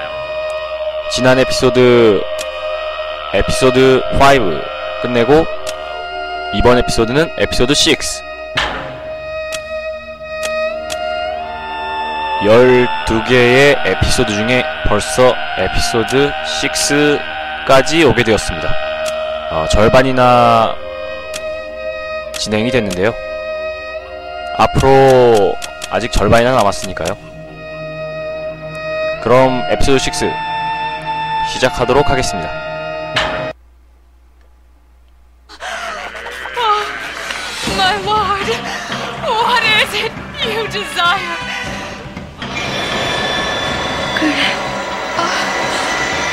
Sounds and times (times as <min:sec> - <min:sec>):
Music: 0:00.0 - 0:33.6, 0:35.8 - 0:46.3
Speech: 0:12.4 - 0:18.8, 0:24.6 - 0:27.2, 0:39.2 - 0:41.4.